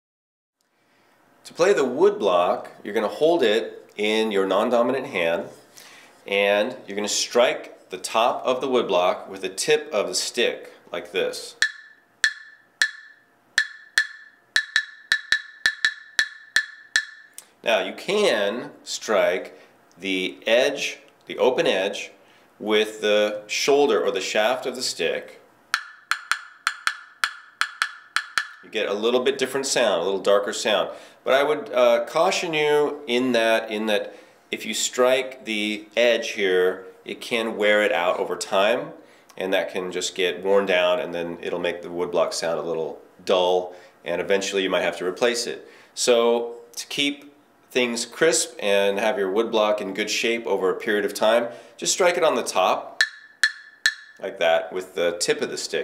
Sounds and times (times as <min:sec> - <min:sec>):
Speech: 0:01.5 - 0:05.6, 0:06.3 - 0:11.6, 0:17.6 - 0:25.4, 0:28.7 - 0:53.0, 0:54.2 - 0:55.8.